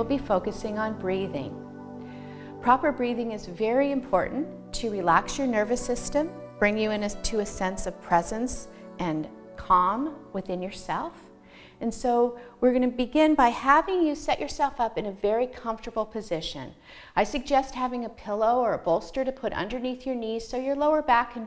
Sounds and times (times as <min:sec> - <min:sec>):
Speech: 0:00.0 - 0:01.6, 0:02.6 - 0:11.2, 0:11.8 - 0:21.4
Music: 0:00.0 - 0:21.4.